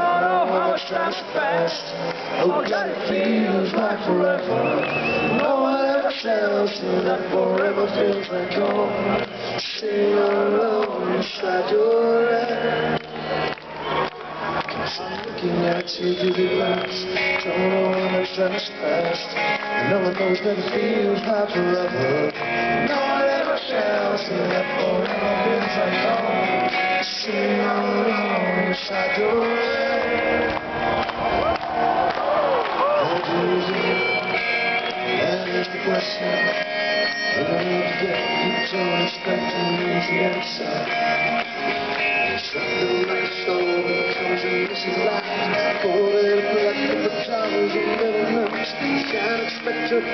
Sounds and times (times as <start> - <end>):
Music: 0.0 - 50.1.